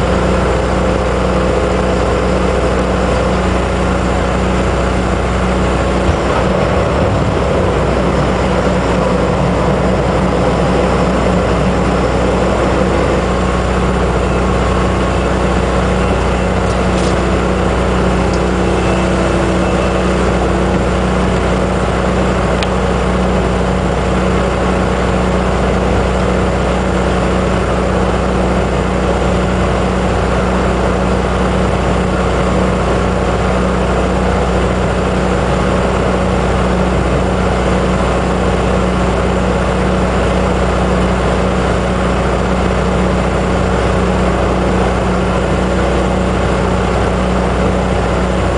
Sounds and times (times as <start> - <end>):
Motorboat, speedboat: 0.0 - 48.5.